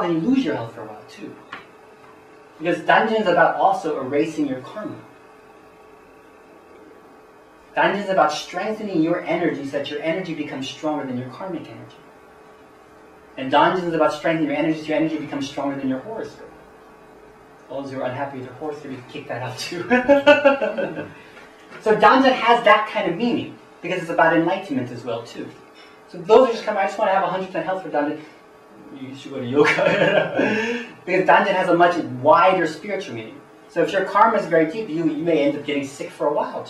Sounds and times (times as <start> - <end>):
Speech: 0.0 - 1.5, 2.6 - 5.1, 7.8 - 12.0, 13.4 - 16.6, 17.7 - 21.2, 21.8 - 36.7.